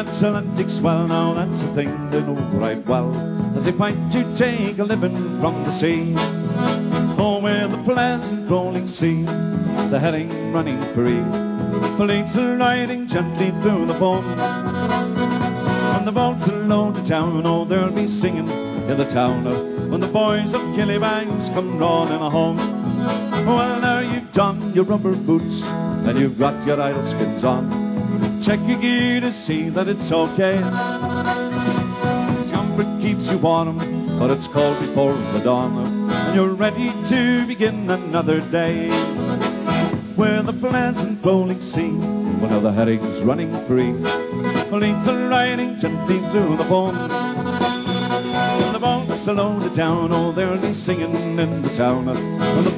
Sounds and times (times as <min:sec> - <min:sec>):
Accordion: 0:00.0 - 0:52.7.